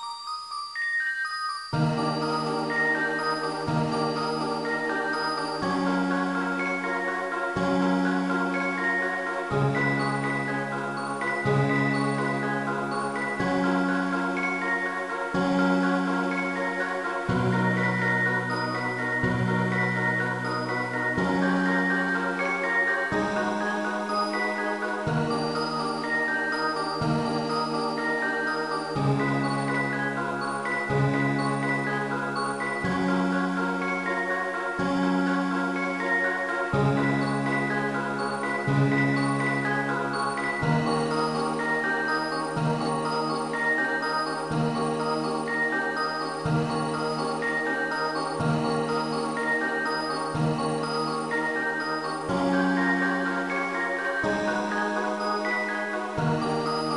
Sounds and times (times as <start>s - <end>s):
Music: 0.0s - 56.9s.